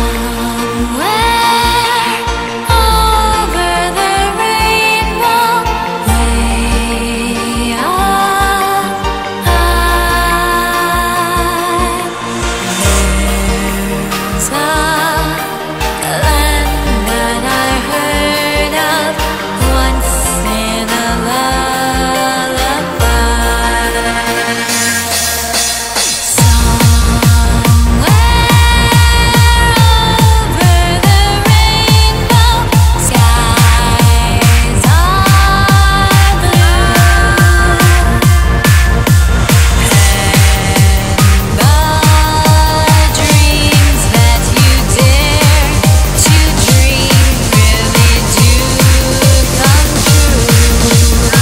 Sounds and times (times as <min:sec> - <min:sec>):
Music: 0:00.0 - 0:51.4.